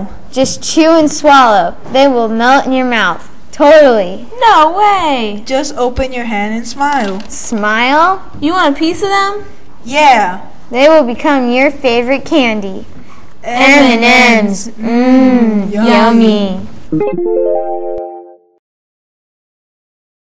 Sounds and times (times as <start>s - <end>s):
Music: 16.9s - 18.6s.